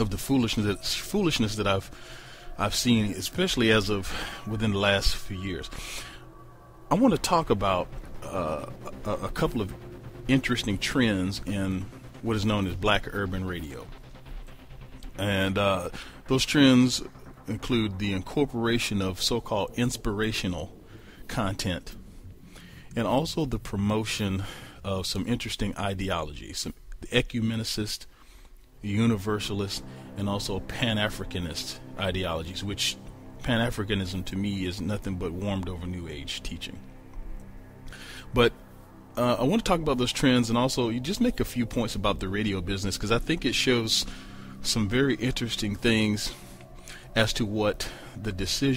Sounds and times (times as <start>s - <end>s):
Speech: 0.0s - 5.9s, 6.9s - 13.9s, 15.2s - 20.7s, 21.3s - 22.0s, 23.0s - 28.1s, 28.8s - 36.8s, 38.3s - 38.5s, 39.2s - 46.4s, 47.1s - 48.7s
Music: 0.0s - 26.1s, 28.2s - 48.7s.